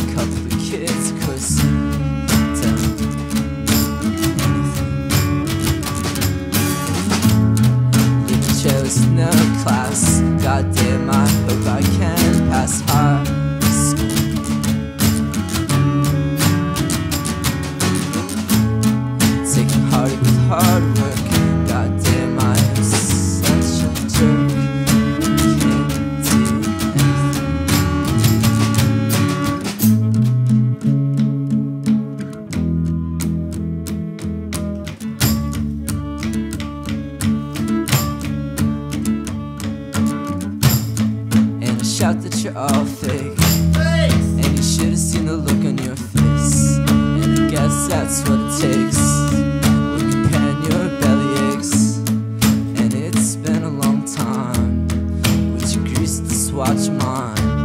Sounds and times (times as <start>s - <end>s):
Music: 0.0s - 57.6s.